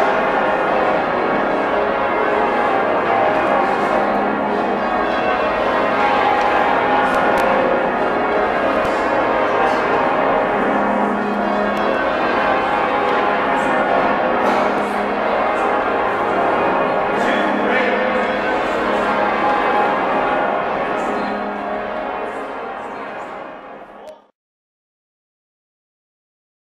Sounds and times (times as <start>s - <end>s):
Speech: 17.1s - 19.2s, 20.8s - 21.6s, 22.2s - 24.3s.